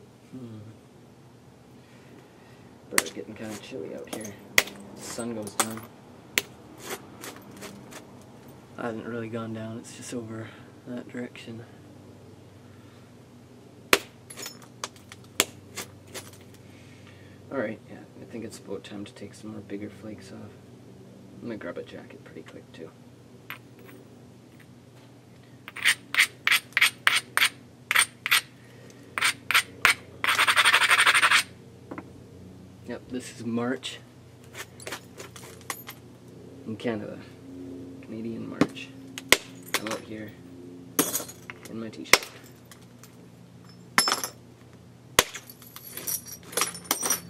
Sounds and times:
Speech: 2.9s - 4.4s, 5.0s - 5.8s, 8.8s - 11.8s, 17.5s - 20.6s, 21.4s - 23.0s, 32.9s - 34.1s, 36.7s - 37.4s, 38.0s - 39.0s, 39.8s - 40.4s, 41.7s - 42.2s.

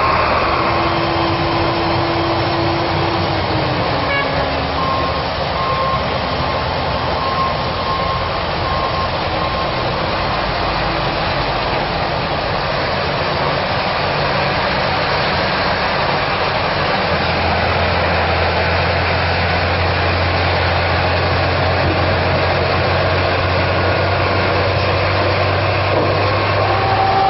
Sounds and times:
Vehicle: 0.0s - 27.2s.

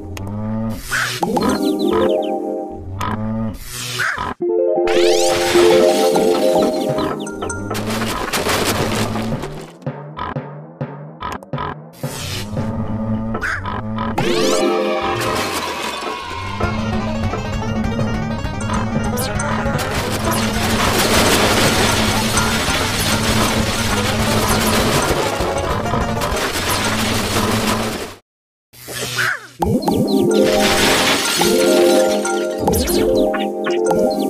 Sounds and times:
Music: 1.6s - 2.8s, 4.4s - 7.8s, 14.2s - 21.0s, 23.6s - 26.4s, 29.7s - 34.2s.

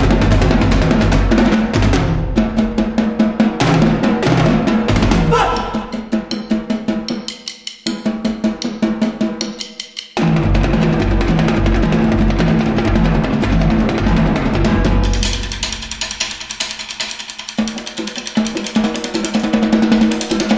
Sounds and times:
Snare drum: 0.0s - 20.5s.

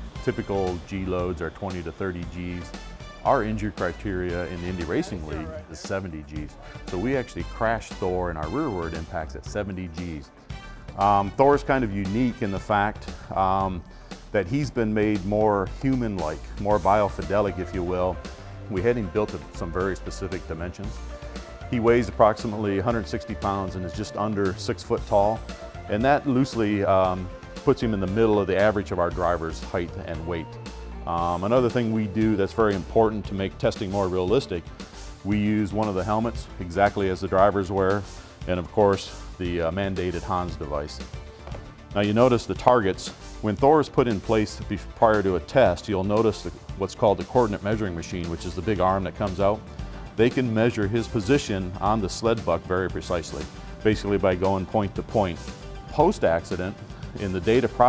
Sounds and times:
Music: 0.0s - 57.8s
Speech: 0.2s - 10.3s, 11.0s - 21.0s, 21.7s - 30.5s, 31.1s - 34.6s, 35.2s - 41.0s, 42.0s - 49.6s, 50.2s - 57.8s.

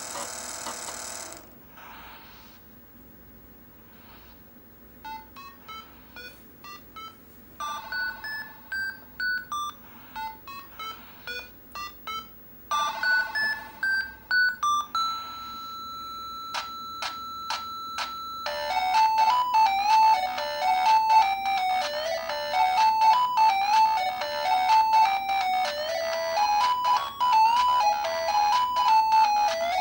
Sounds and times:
Television: 0.0s - 29.8s
Music: 5.1s - 15.1s, 16.6s - 29.8s.

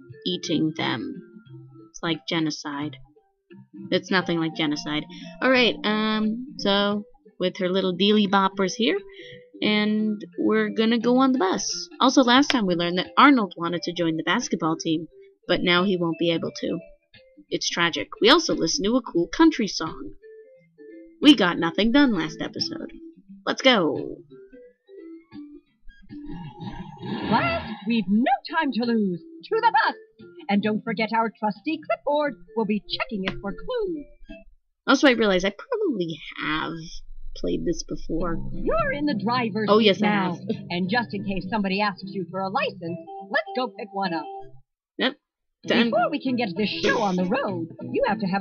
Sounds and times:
Music: 0.0s - 48.4s
Speech: 0.3s - 1.2s, 2.0s - 3.0s, 3.9s - 16.8s, 17.5s - 20.2s, 21.2s - 22.9s, 23.5s - 24.2s, 26.4s - 34.0s, 34.9s - 44.3s, 45.0s - 48.4s.

